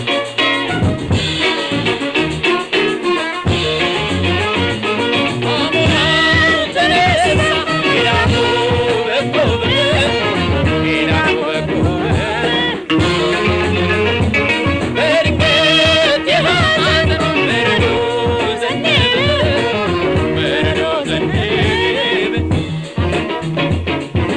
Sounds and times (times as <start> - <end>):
Singing: 5.4 - 13.9, 14.6 - 22.6.